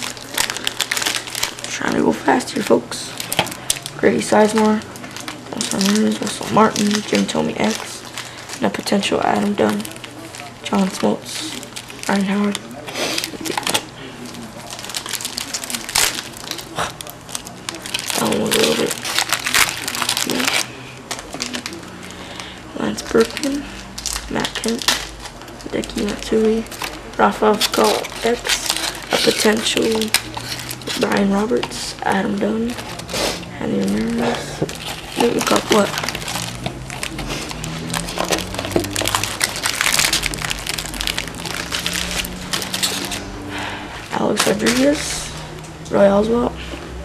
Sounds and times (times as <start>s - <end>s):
Crackle: 0.0s - 1.8s, 3.1s - 31.0s, 33.9s - 43.2s.